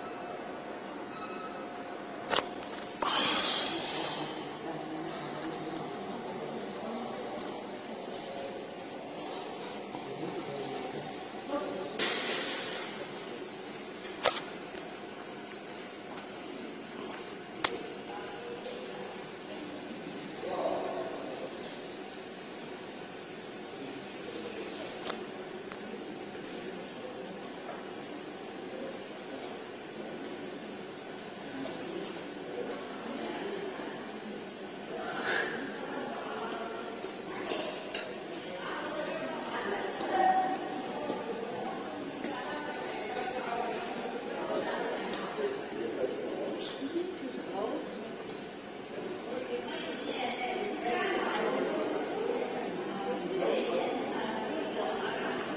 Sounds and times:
Speech: 17.0 - 22.2, 23.6 - 55.5.

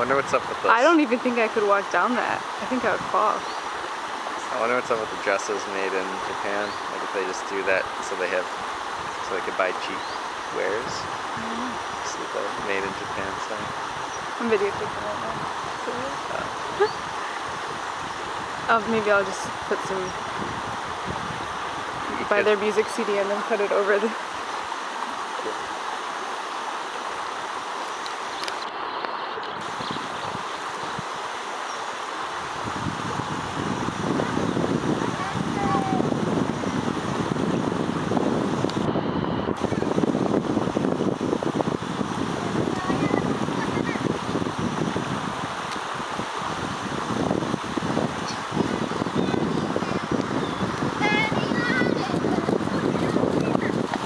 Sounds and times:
Speech: 0.0 - 3.4, 4.5 - 8.4, 9.3 - 10.0, 10.6 - 13.6, 14.4 - 16.9, 18.7 - 20.1, 22.1 - 24.2
Rowboat, canoe, kayak: 0.0 - 54.0.

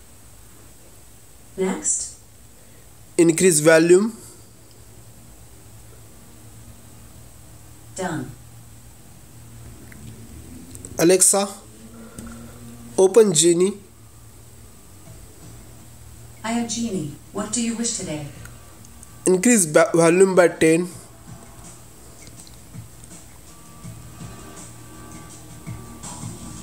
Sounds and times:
Speech: 1.6 - 2.2, 3.2 - 4.3, 8.0 - 8.4, 11.0 - 11.6, 13.0 - 13.8, 16.4 - 18.4, 19.2 - 21.0
Music: 9.5 - 26.6.

